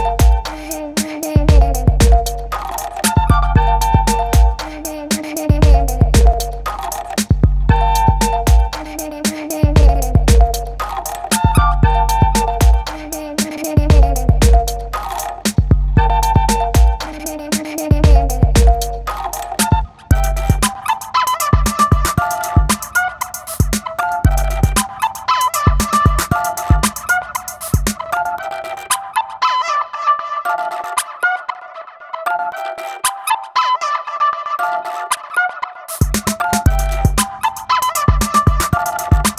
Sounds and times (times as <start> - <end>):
Music: 0.0 - 39.3.